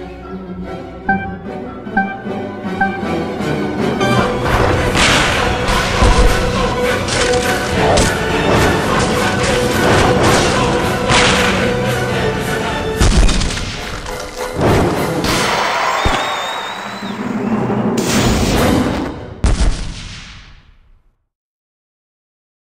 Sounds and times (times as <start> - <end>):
Music: 0.0 - 19.4.